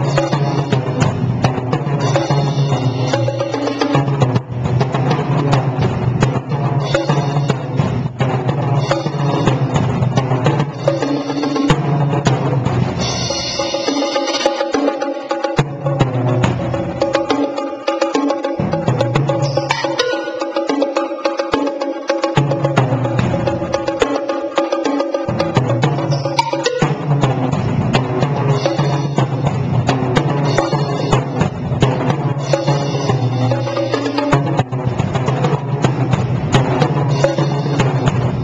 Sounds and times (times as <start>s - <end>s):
Music: 0.0s - 38.4s.